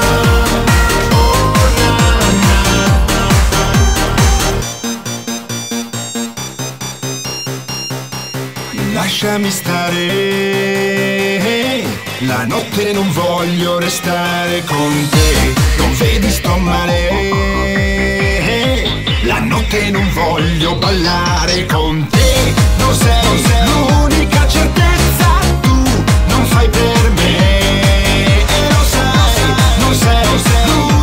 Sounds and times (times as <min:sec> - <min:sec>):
Music: 0:00.0 - 0:31.0.